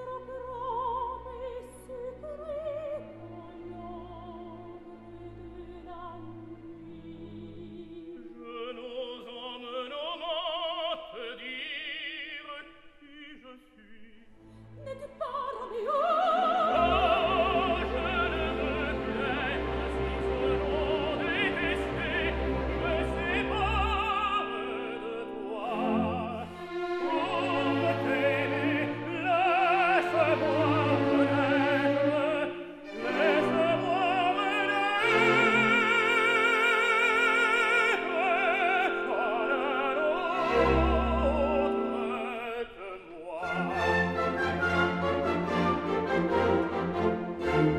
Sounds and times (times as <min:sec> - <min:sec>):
Opera: 0:00.0 - 0:47.7.